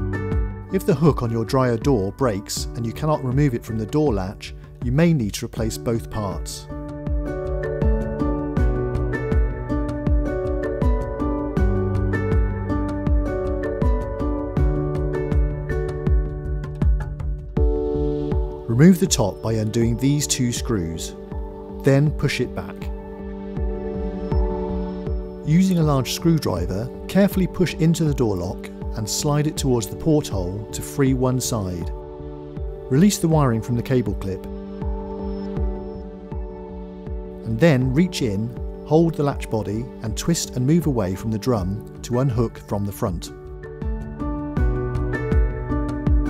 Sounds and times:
Music: 0.0 - 46.3
Speech: 0.8 - 6.7, 18.7 - 21.2, 21.8 - 22.9, 25.5 - 31.9, 32.9 - 34.5, 37.5 - 43.3.

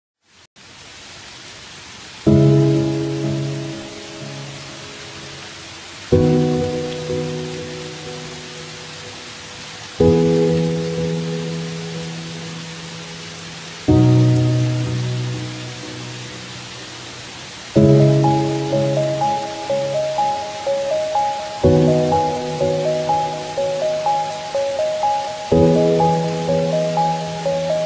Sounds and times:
Pink noise: 0.6 - 27.8
Music: 2.3 - 4.9, 6.1 - 8.9, 10.0 - 13.1, 13.8 - 16.7, 17.8 - 27.8.

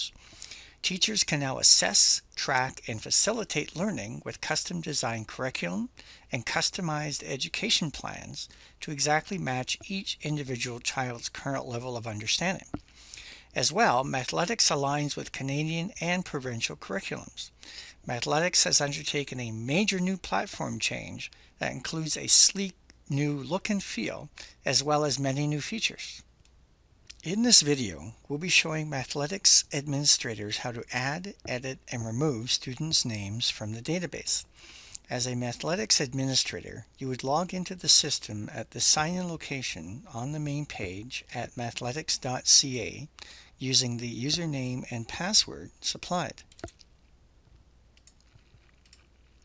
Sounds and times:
Speech: 0.8 - 12.8, 13.5 - 26.3, 27.1 - 46.4.

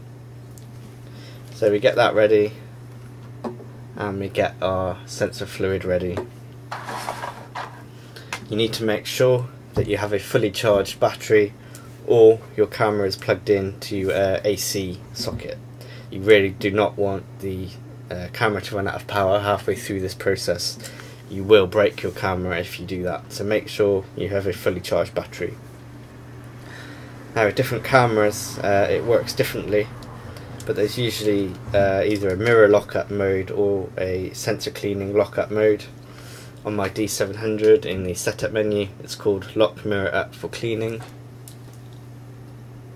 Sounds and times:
Speech: 1.6 - 2.6, 4.0 - 6.3, 8.5 - 25.6, 27.4 - 30.0, 30.7 - 36.0, 36.6 - 41.1.

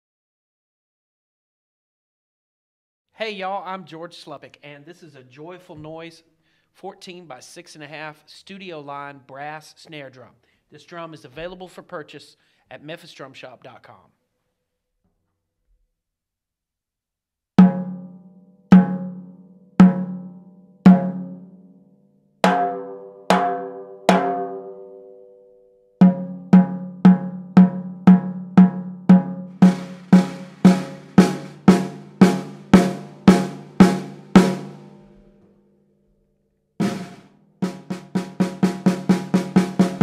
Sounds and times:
Drum: 17.6 - 18.1, 18.7 - 20.3, 20.9 - 21.4, 22.5 - 24.6, 26.0 - 35.3, 36.8 - 40.0
Drum kit: 17.6 - 18.1, 18.7 - 19.2, 19.8 - 20.3, 20.9 - 21.4, 22.5 - 24.7, 26.0 - 35.3, 36.8 - 40.0.

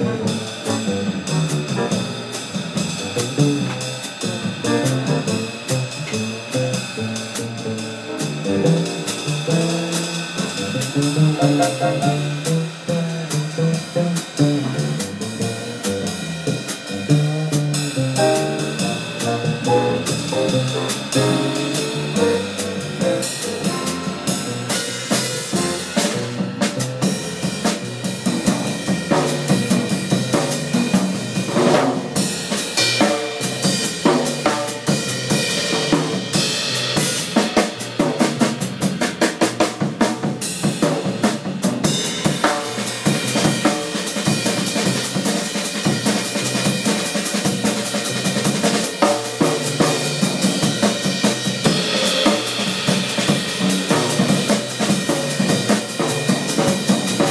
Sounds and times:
Bass drum: 0.0 - 57.3
Drum kit: 0.0 - 57.3.

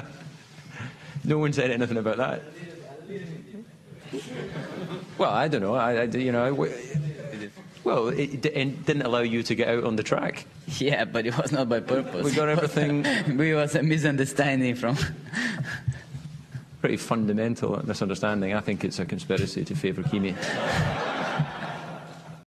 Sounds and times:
Speech: 5.2 - 15.2, 16.8 - 20.4.

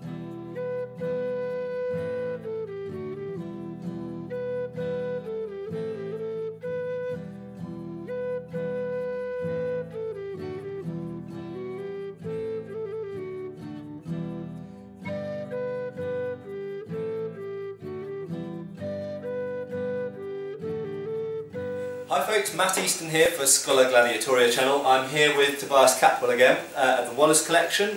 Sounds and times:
Flute: 0.0 - 27.8.

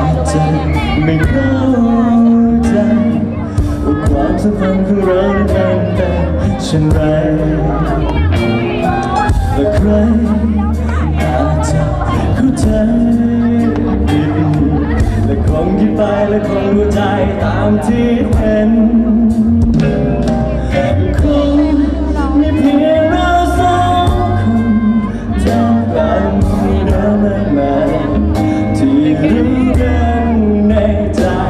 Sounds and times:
Ska: 0.0 - 31.5.

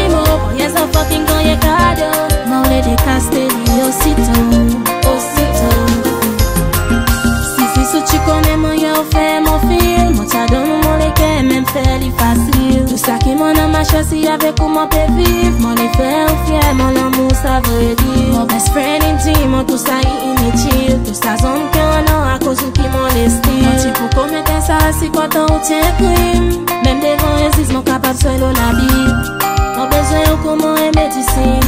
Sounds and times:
Music of Africa: 0.0 - 31.6.

